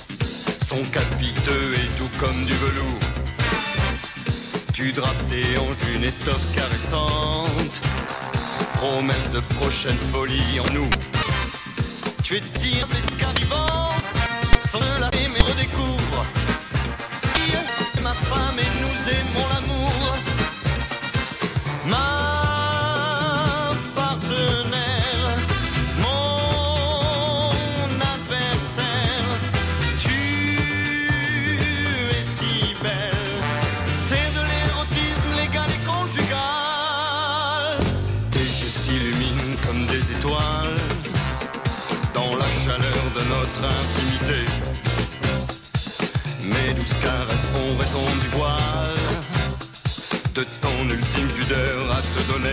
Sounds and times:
Music: 0.0 - 52.5.

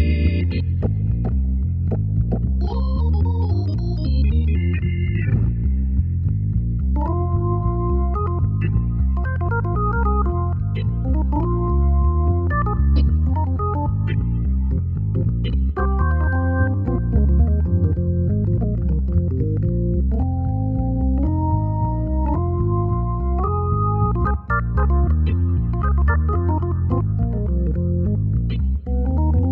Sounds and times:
Electric piano: 0.0 - 29.5.

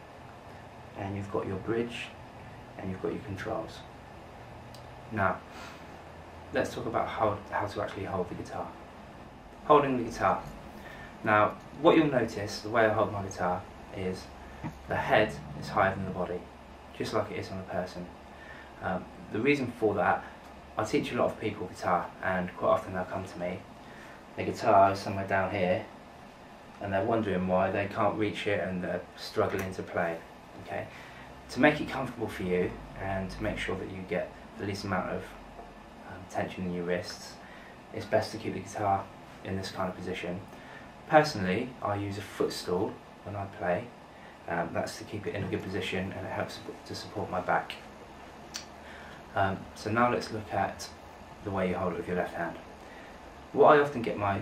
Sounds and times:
Speech: 0.9 - 2.2, 2.8 - 3.9, 5.1 - 5.5, 6.5 - 8.8, 9.6 - 10.6, 11.2 - 18.2, 18.8 - 23.7, 24.4 - 25.9, 26.8 - 35.4, 36.0 - 40.5, 41.1 - 47.9, 49.3 - 52.6, 53.5 - 54.4.

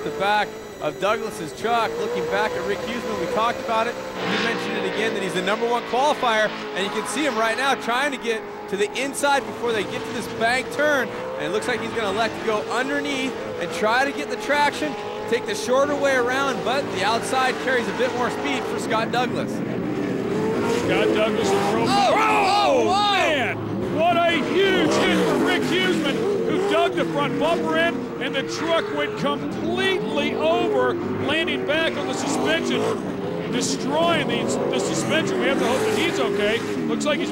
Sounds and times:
Speech: 0.0 - 19.5, 20.8 - 37.3
Car: 0.0 - 37.3.

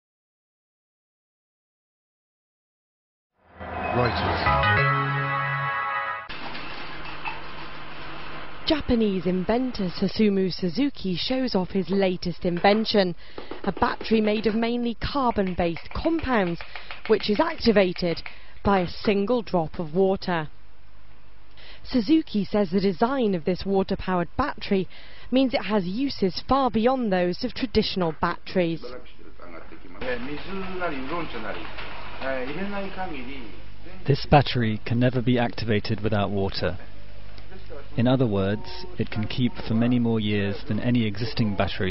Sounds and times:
Speech: 37.5 - 41.9.

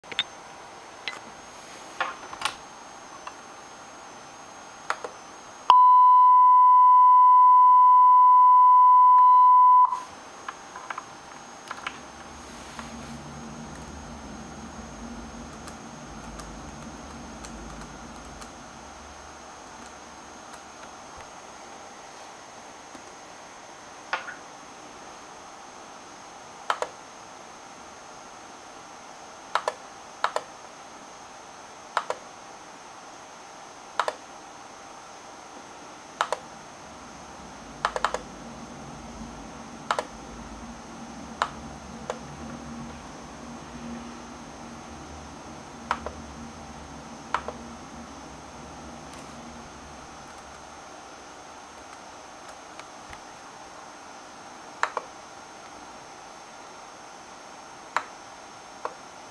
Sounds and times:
Inside, small room: 0.0 - 59.3
Beep, bleep: 5.7 - 10.0.

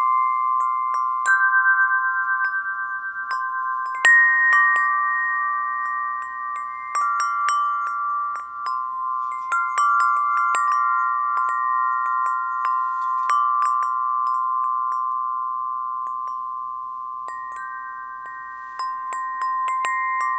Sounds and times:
Wind chime: 0.0 - 20.3.

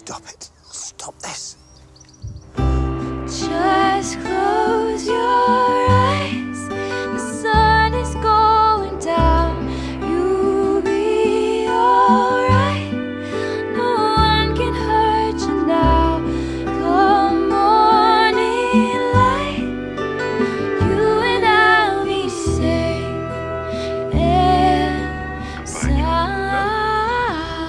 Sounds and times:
Speech: 0.0 - 1.6, 25.5 - 27.5
Music: 2.1 - 27.6.

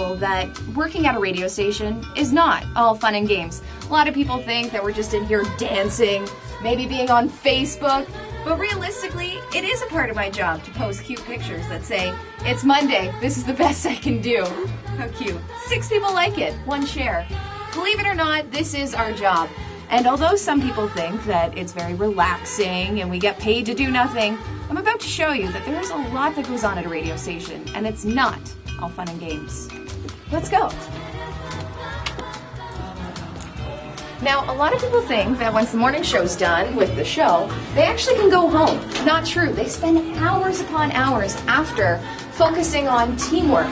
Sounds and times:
Speech: 0.0 - 29.7, 34.2 - 43.7
Music: 0.0 - 43.7.

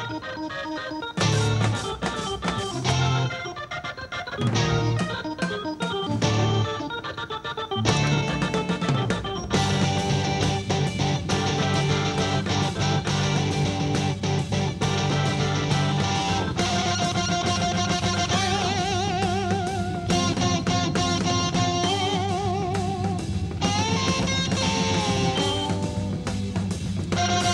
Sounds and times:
Drum kit: 0.0 - 27.5
Guitar: 0.0 - 27.5
Drum: 1.2 - 3.4, 7.9 - 27.5.

